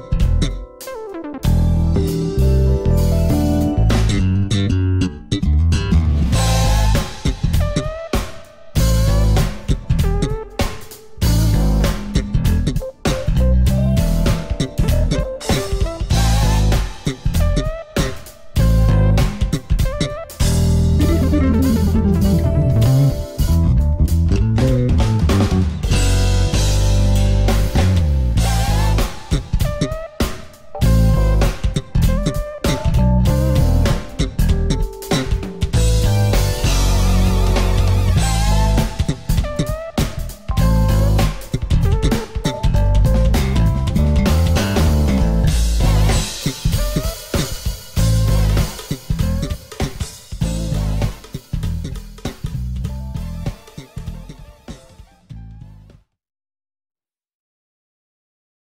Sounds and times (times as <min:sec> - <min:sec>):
Electronic tuner: 0:00.0 - 0:52.1, 0:52.8 - 0:55.9
Guitar: 0:00.0 - 0:55.9.